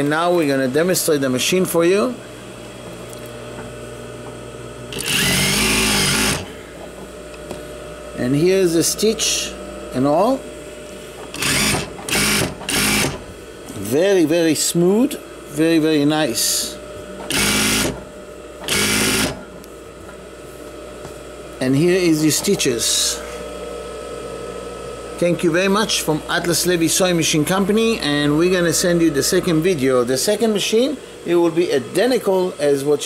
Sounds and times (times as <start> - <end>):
Speech: 0.0 - 2.2, 8.2 - 10.5, 13.7 - 16.8, 21.6 - 23.4, 25.2 - 33.0
Sewing machine: 4.9 - 6.5, 11.3 - 13.2, 17.3 - 18.0, 18.6 - 19.4.